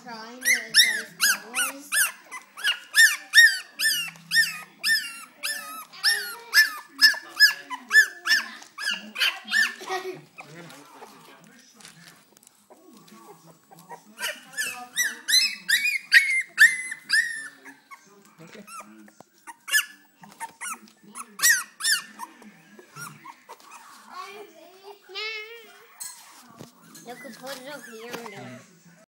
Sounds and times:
Speech: 0.0 - 2.1, 22.2 - 29.0
Domestic animals, pets: 0.1 - 29.0.

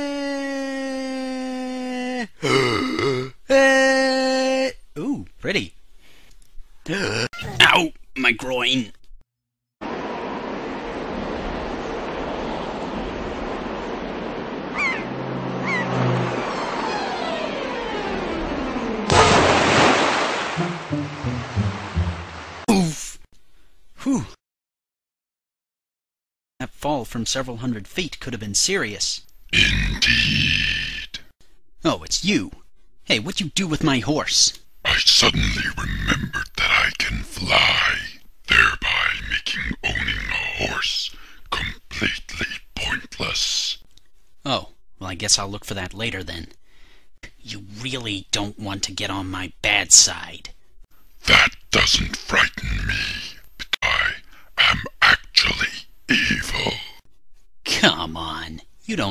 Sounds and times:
Speech: 3.5 - 5.8, 6.9 - 9.0, 22.7 - 23.2, 24.0 - 24.4, 26.6 - 46.6, 47.2 - 50.6, 51.2 - 56.9, 57.7 - 59.1.

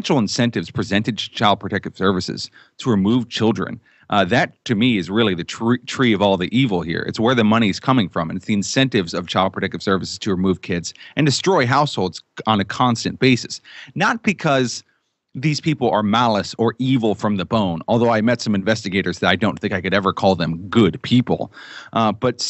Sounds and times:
Speech: 0.0 - 14.8, 15.4 - 22.4.

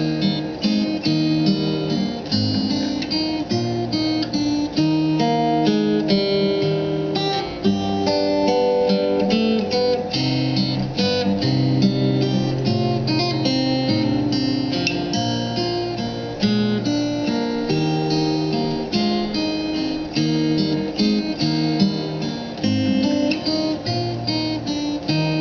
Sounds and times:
Strum: 0.0 - 25.4.

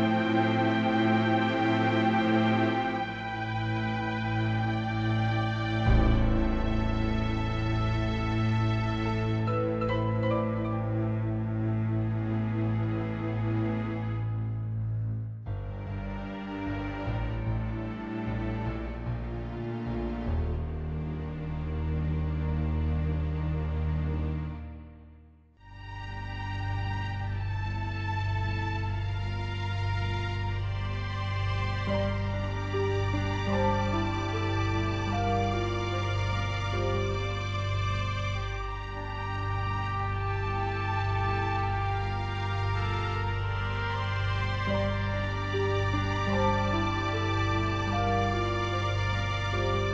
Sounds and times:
Soundtrack music: 0.0 - 25.0, 25.7 - 49.9.

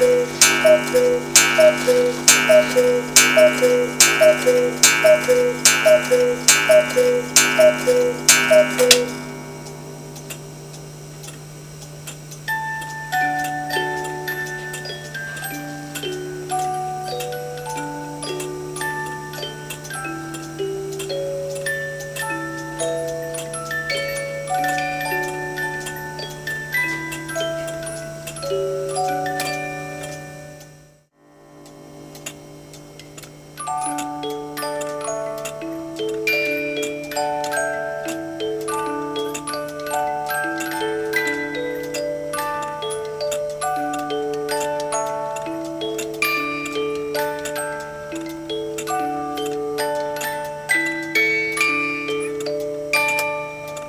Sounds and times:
Music: 12.4 - 53.8.

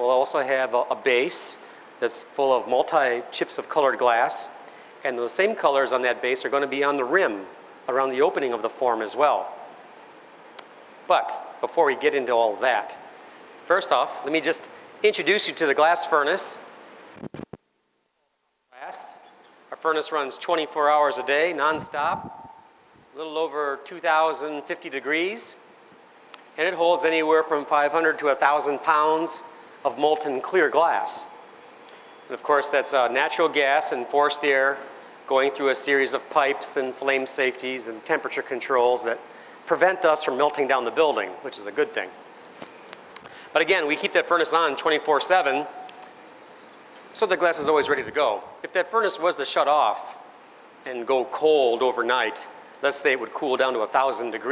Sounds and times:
Speech: 0.0 - 9.6, 11.1 - 13.0, 13.7 - 16.7, 18.8 - 22.3, 23.2 - 25.6, 26.6 - 31.3, 32.3 - 42.2, 43.6 - 45.8, 47.2 - 50.2, 50.9 - 54.5.

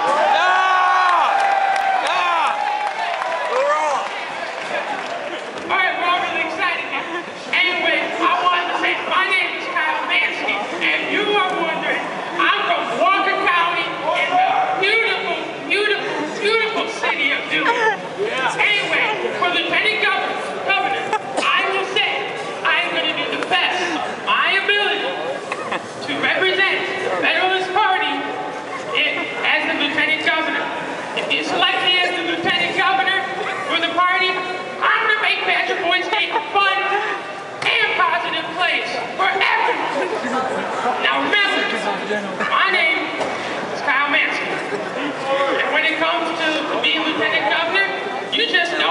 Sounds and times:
Narration, monologue: 5.5 - 25.4, 26.0 - 48.9
Male speech, man speaking: 5.7 - 25.4, 26.0 - 43.2, 43.8 - 48.9.

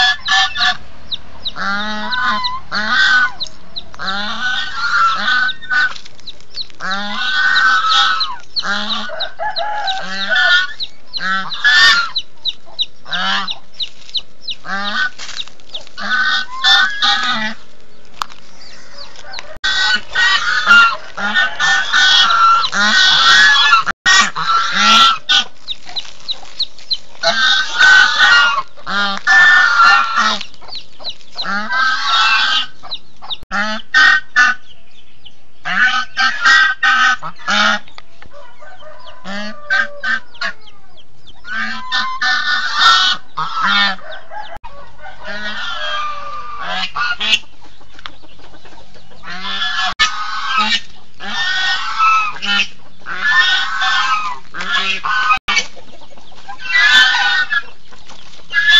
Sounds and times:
Cluck: 0.0 - 0.8, 1.4 - 17.6, 18.2 - 34.7, 35.6 - 40.8, 41.4 - 58.7
Honk: 0.0 - 0.8, 1.6 - 6.0, 6.8 - 12.2, 13.1 - 13.6, 14.6 - 17.6, 19.1 - 26.6, 27.2 - 30.4, 31.4 - 32.8, 33.5 - 34.6, 35.6 - 40.6, 41.5 - 44.0, 44.7 - 47.4, 49.2 - 55.8, 56.5 - 57.7, 58.5 - 58.7.

